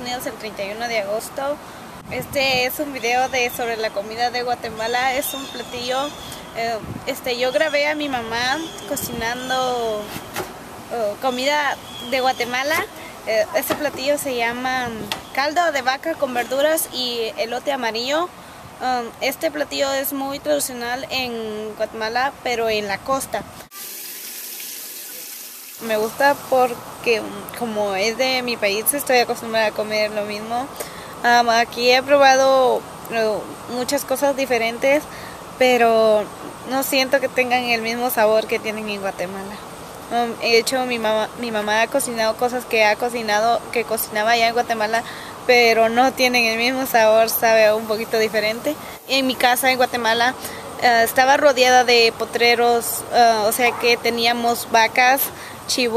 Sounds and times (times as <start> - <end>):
Speech: 0.0 - 10.1, 10.9 - 23.5, 25.8 - 55.9.